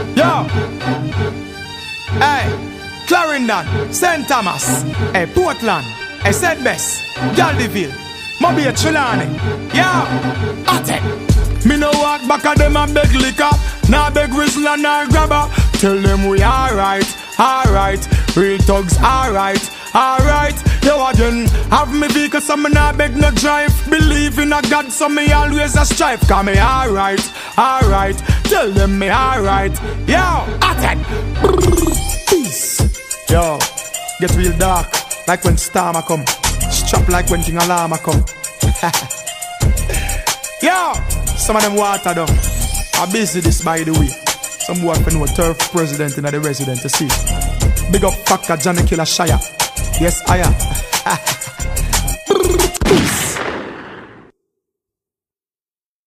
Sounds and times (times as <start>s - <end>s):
Hip hop music: 0.0s - 52.9s
Reggae: 1.7s - 53.4s.